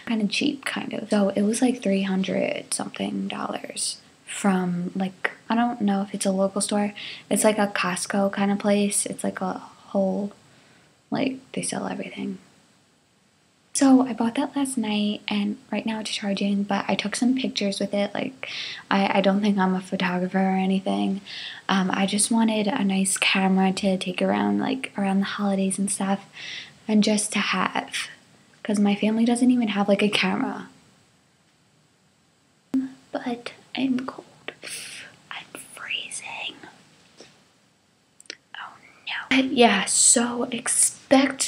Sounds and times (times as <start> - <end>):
Speech: 0.0 - 10.4, 11.1 - 12.4, 13.8 - 30.7, 32.8 - 36.7, 38.6 - 41.4.